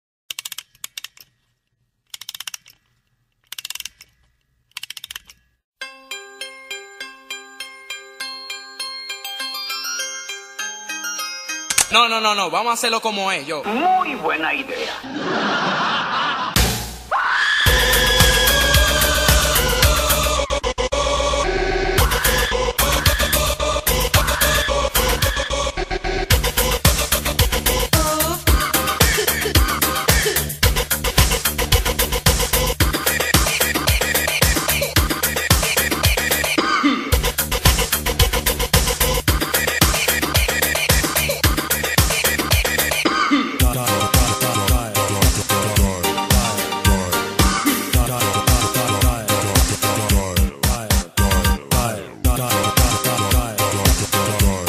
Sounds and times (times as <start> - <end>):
Music: 5.8 - 12.6, 16.6 - 54.6
Speech: 11.9 - 15.0.